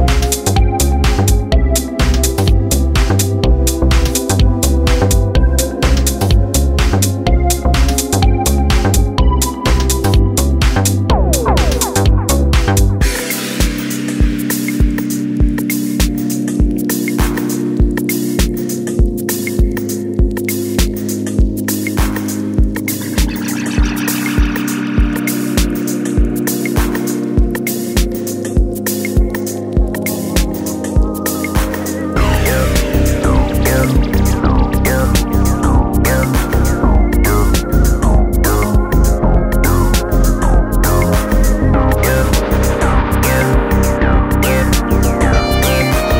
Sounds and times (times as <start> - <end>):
Funk: 0.0 - 14.0, 29.2 - 46.1
House music: 0.0 - 46.1
Synthesizer: 0.0 - 46.1.